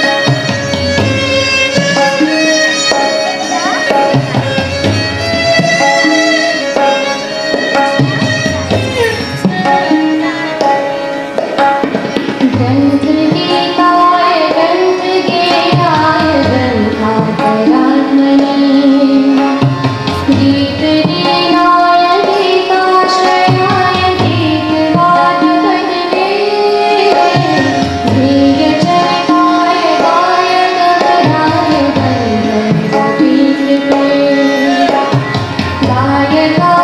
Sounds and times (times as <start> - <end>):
Tabla: 0.0 - 36.8.